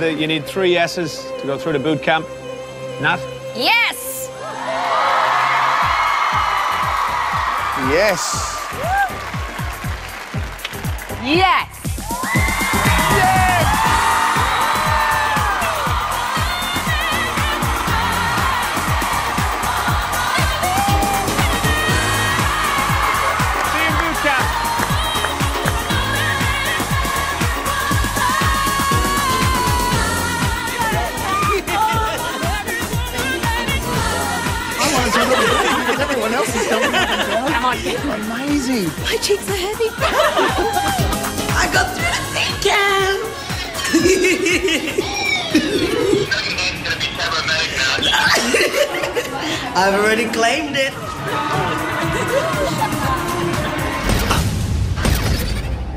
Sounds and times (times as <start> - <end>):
Music: 0.0 - 55.9
Inside, large room or hall: 2.3 - 55.9
Singing: 13.1 - 44.0.